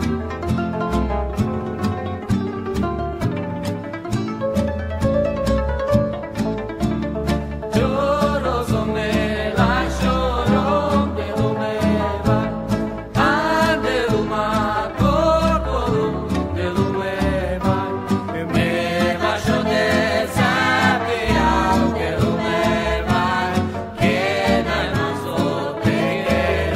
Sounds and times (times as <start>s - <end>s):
Middle Eastern music: 0.0s - 26.7s.